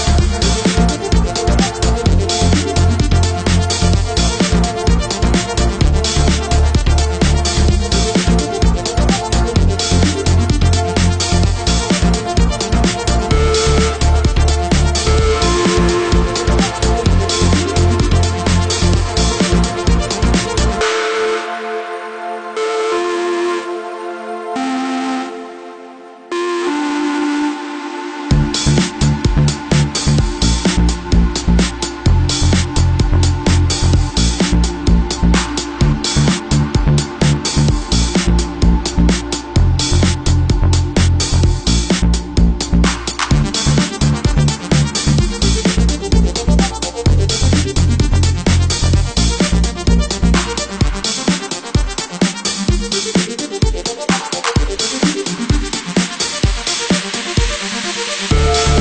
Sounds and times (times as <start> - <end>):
Electronica: 0.0 - 58.8.